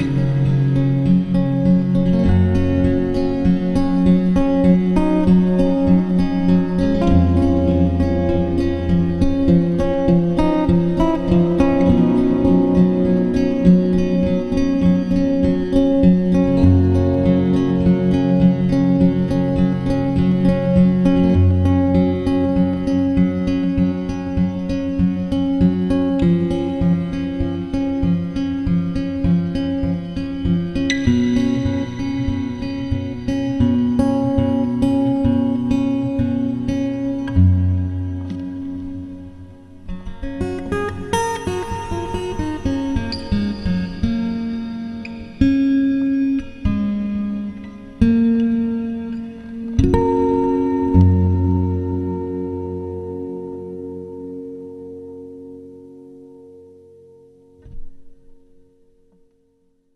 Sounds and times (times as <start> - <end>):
Guitar: 0.0 - 59.9.